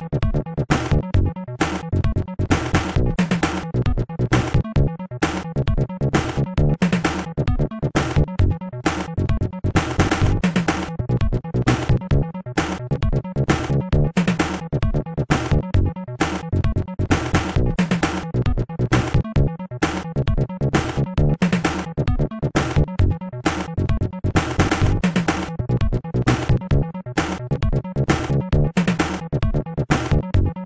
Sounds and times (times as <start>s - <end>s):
Video game music: 0.0s - 30.6s.